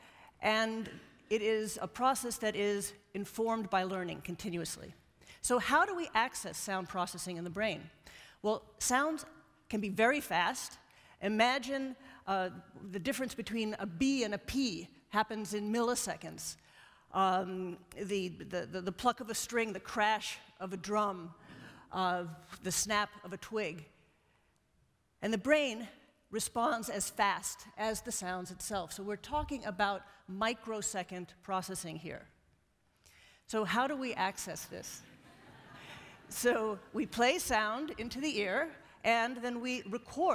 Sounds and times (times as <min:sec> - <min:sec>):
Speech: 0:00.4 - 0:16.6, 0:25.2 - 0:32.3, 0:33.5 - 0:35.0, 0:36.3 - 0:40.3.